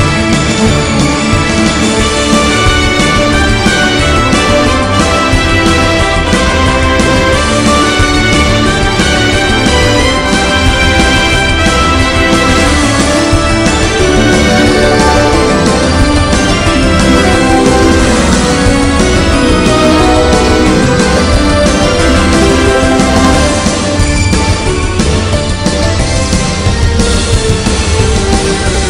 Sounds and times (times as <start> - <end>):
Music: 0.0 - 28.9.